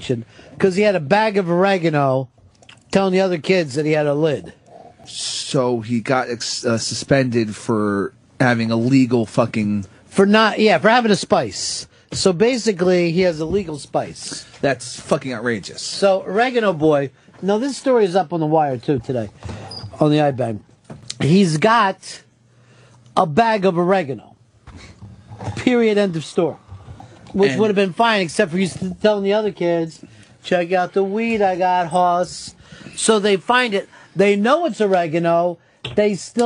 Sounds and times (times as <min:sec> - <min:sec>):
Speech: 0:00.0 - 0:02.3, 0:02.9 - 0:19.4, 0:20.0 - 0:22.3, 0:23.2 - 0:24.4, 0:25.5 - 0:26.6, 0:27.4 - 0:36.4.